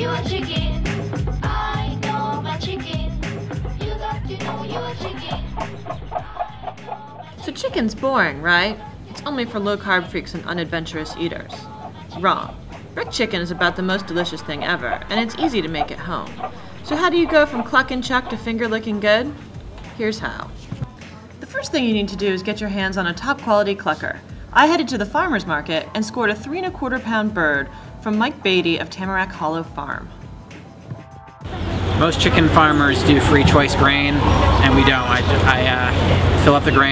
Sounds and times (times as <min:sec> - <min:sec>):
Speech: 0:07.4 - 0:19.4, 0:20.0 - 0:20.5, 0:21.4 - 0:30.1, 0:32.0 - 0:36.9.